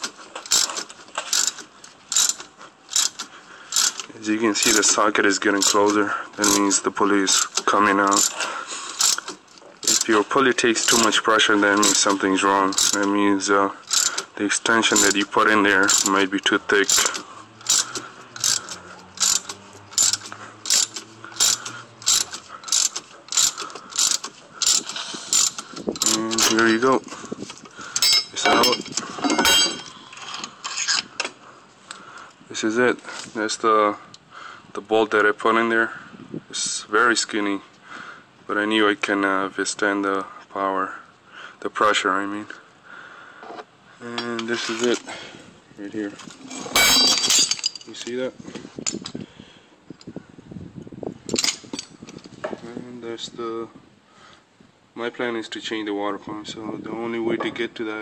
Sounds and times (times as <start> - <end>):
Speech: 4.2 - 8.2, 10.0 - 13.8, 14.4 - 17.0, 26.0 - 27.0, 34.8 - 37.6, 38.5 - 41.0, 41.6 - 42.6, 44.0 - 45.1, 45.8 - 46.2, 47.9 - 48.4, 52.6 - 53.8, 55.0 - 58.0.